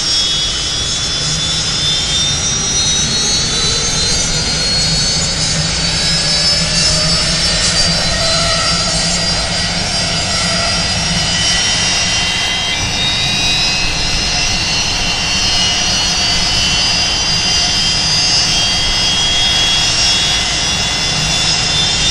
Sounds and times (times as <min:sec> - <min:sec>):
Outside, urban or manmade: 0:00.0 - 0:22.1.